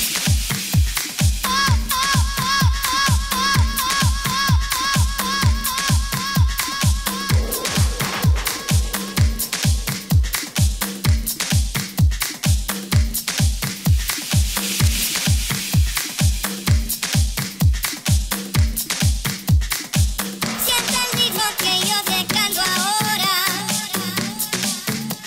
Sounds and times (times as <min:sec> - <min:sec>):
Disco: 0:00.0 - 0:25.2.